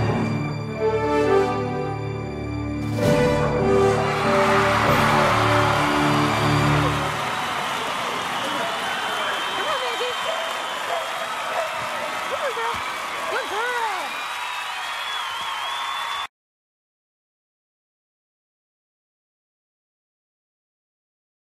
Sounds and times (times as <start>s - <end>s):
Speech: 12.3s - 14.1s.